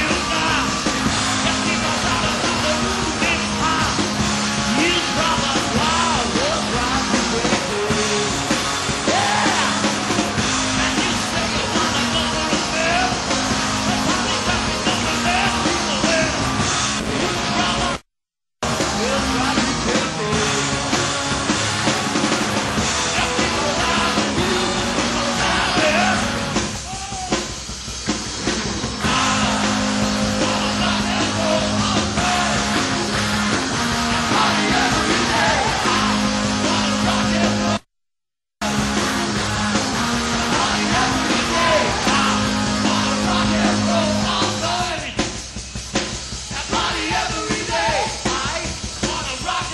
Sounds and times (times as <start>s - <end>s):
Rock and roll: 0.0s - 49.7s.